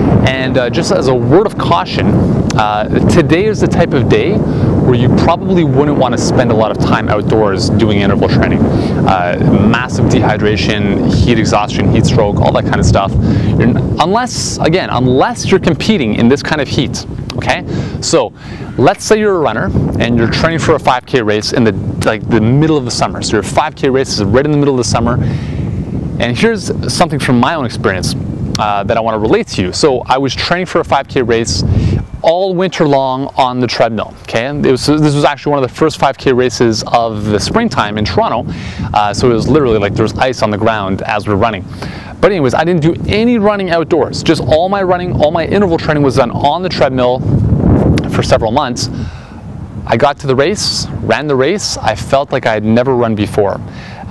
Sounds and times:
Outside, urban or manmade: 0:00.0 - 0:54.1
Male speech, man speaking: 0:00.2 - 0:25.2, 0:26.2 - 0:47.2, 0:48.0 - 0:49.0, 0:49.9 - 0:53.6.

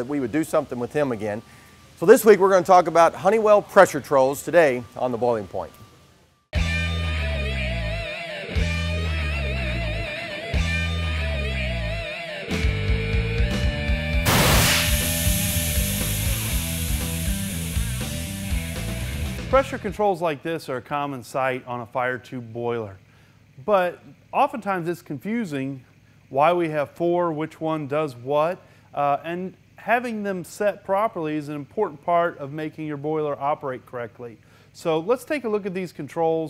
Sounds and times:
Speech: 0:00.0 - 0:01.4, 0:02.0 - 0:05.8, 0:19.5 - 0:23.0, 0:23.6 - 0:36.4.

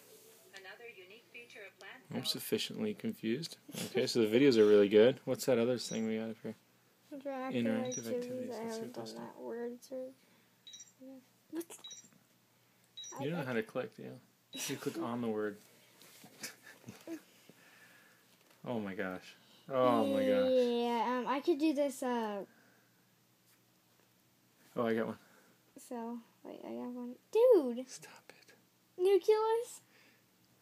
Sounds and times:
Inside, small room: 0:00.0 - 0:30.6.

